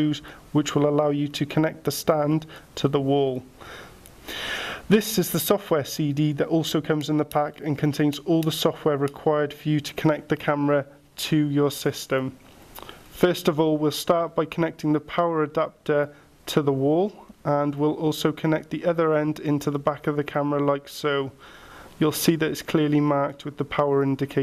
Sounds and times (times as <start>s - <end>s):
Speech: 0.0s - 3.5s, 4.9s - 12.4s, 13.2s - 21.4s, 22.0s - 24.4s.